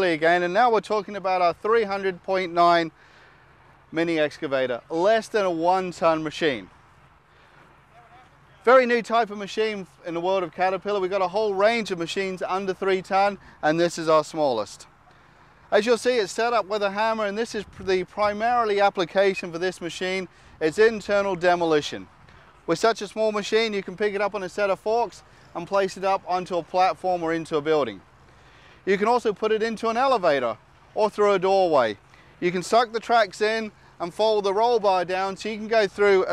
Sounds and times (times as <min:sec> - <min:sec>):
Speech: 0:00.0 - 0:02.9, 0:03.9 - 0:06.7, 0:07.9 - 0:14.9, 0:15.7 - 0:22.1, 0:22.7 - 0:28.0, 0:28.9 - 0:36.3.